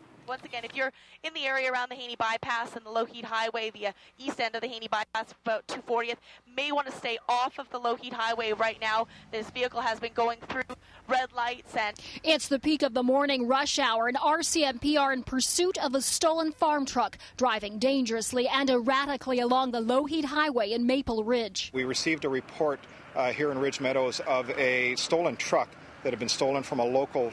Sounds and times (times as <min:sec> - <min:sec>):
Speech: 0:00.3 - 0:27.3.